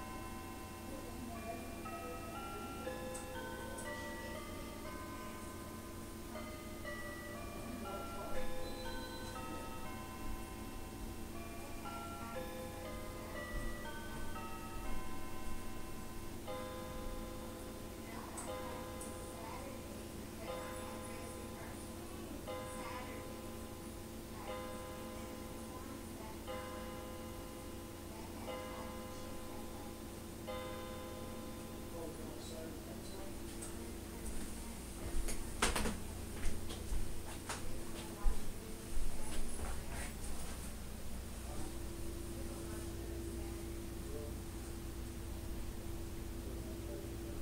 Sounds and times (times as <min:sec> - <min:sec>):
Music: 0:00.0 - 0:27.8
Speech: 0:00.7 - 0:05.6, 0:07.3 - 0:10.1, 0:17.9 - 0:23.5, 0:24.3 - 0:26.8, 0:28.1 - 0:30.1, 0:31.8 - 0:36.7, 0:37.6 - 0:40.6, 0:41.4 - 0:44.6, 0:45.7 - 0:47.4.